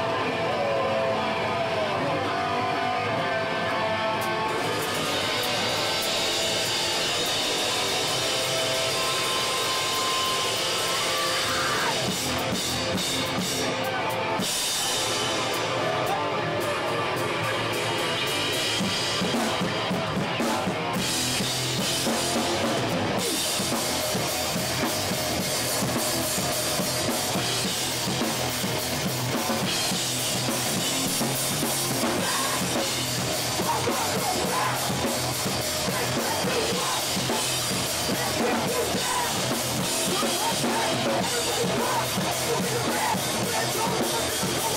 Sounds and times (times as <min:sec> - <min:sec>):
Music: 0:00.0 - 0:44.7.